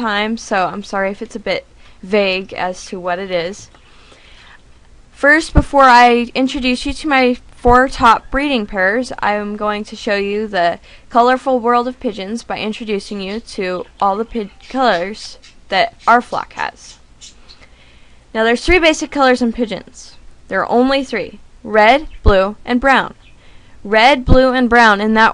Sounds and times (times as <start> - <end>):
Speech: 0.0 - 3.7, 5.2 - 17.0, 18.4 - 23.2, 23.9 - 25.3
Bird: 13.3 - 16.2, 17.2 - 17.7.